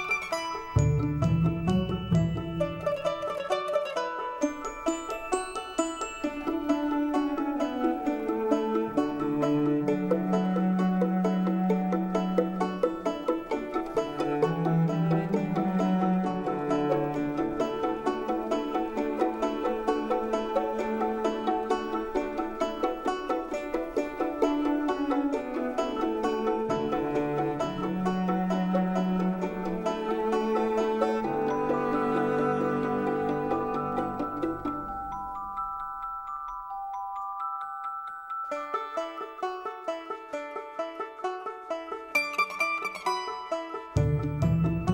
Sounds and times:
Music: 0.0s - 44.9s.

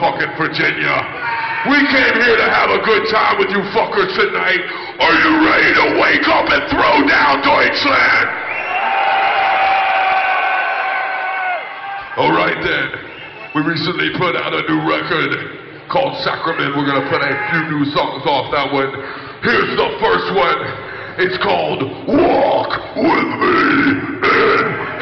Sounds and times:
Speech: 0.0s - 8.3s, 12.2s - 13.0s, 13.6s - 25.0s.

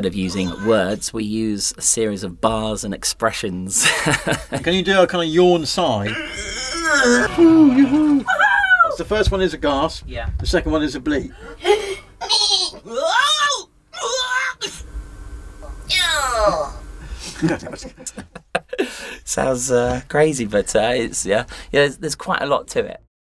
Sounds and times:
Speech: 0.0s - 3.8s, 4.6s - 6.1s, 8.9s - 11.3s, 19.3s - 23.1s.

